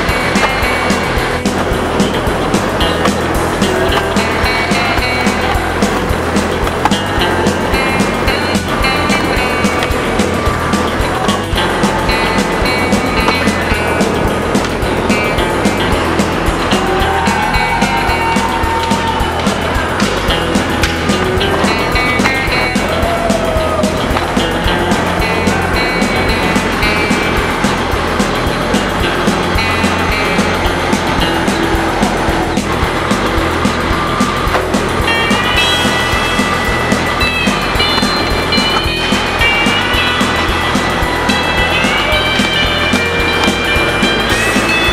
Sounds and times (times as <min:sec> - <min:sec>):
Skateboard: 0:00.0 - 0:16.3
Music: 0:00.0 - 0:44.9.